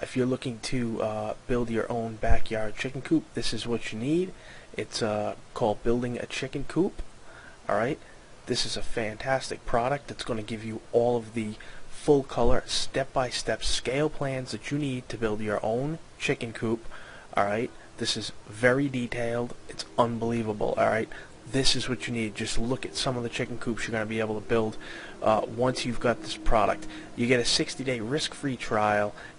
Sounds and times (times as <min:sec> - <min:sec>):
Speech: 0:00.0 - 0:07.1, 0:07.7 - 0:29.2.